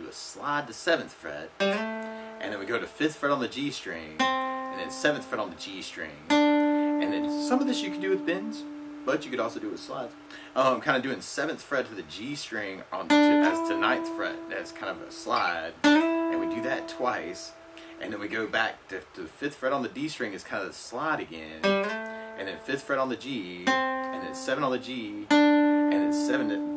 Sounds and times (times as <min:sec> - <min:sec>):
Speech: 0:00.0 - 0:01.6, 0:02.4 - 0:06.3, 0:07.0 - 0:21.8, 0:22.4 - 0:26.7.